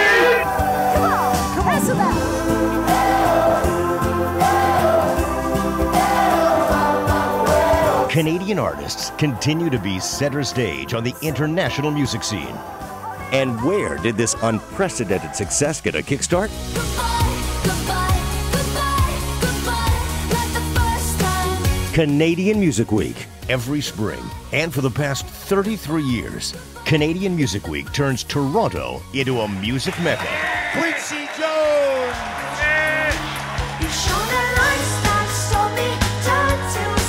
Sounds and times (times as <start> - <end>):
Music: 0.0 - 37.0
Speech: 8.1 - 12.6, 13.3 - 16.5, 22.0 - 33.2.